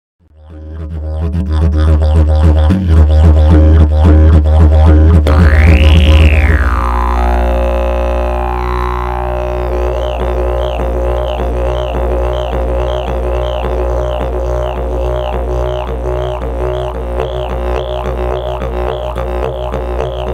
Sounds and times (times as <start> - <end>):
Didgeridoo: 0.2 - 20.3.